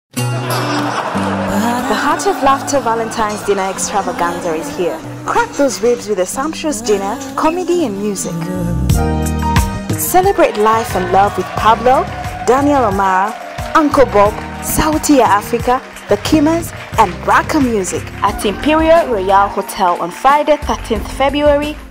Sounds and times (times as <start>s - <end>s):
Rhythm and blues: 0.1s - 21.9s
Laughter: 0.3s - 5.1s
Singing: 1.4s - 9.0s
Speech: 1.8s - 8.8s, 10.0s - 21.8s.